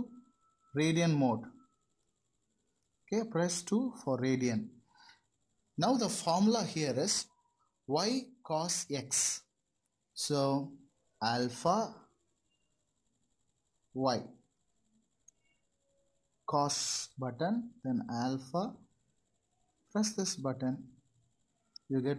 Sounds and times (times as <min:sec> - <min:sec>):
Speech: 0:00.8 - 0:01.5, 0:03.1 - 0:04.7, 0:05.8 - 0:07.3, 0:07.9 - 0:09.4, 0:10.2 - 0:12.0, 0:14.0 - 0:14.3, 0:16.5 - 0:18.8, 0:20.0 - 0:20.8, 0:21.9 - 0:22.1.